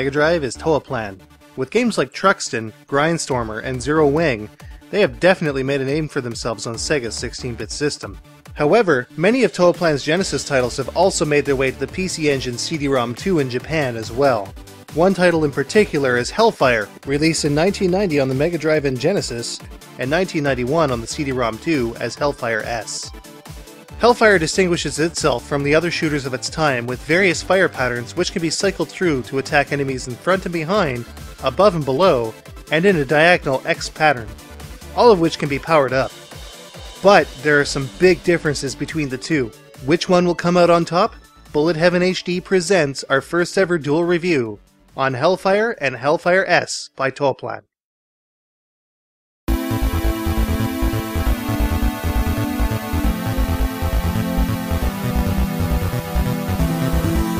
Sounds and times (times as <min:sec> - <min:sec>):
Speech: 0:00.0 - 0:23.1, 0:24.0 - 0:34.3, 0:35.0 - 0:36.1, 0:37.0 - 0:47.8
Music: 0:00.0 - 0:46.8, 0:49.5 - 0:57.3.